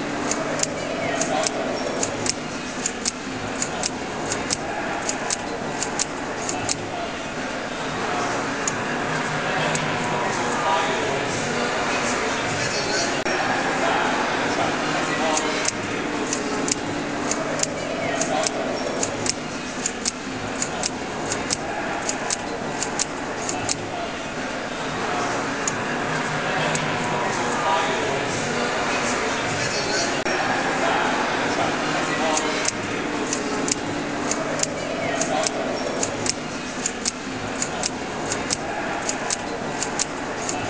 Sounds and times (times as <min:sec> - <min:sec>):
Speech: 0:00.0 - 0:40.7
Typewriter: 0:00.2 - 0:07.0, 0:15.3 - 0:23.9, 0:32.3 - 0:40.7.